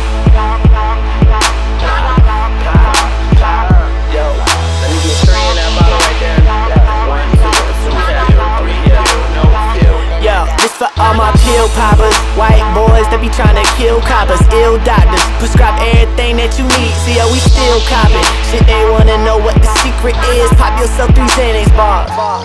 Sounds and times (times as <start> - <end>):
Music: 0.0 - 22.4.